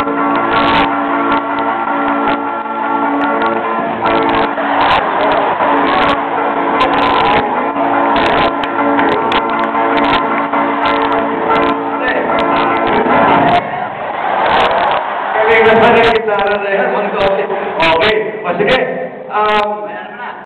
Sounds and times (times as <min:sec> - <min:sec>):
Strum: 0:00.0 - 0:15.3
Speech: 0:12.0 - 0:12.4, 0:15.4 - 0:20.4.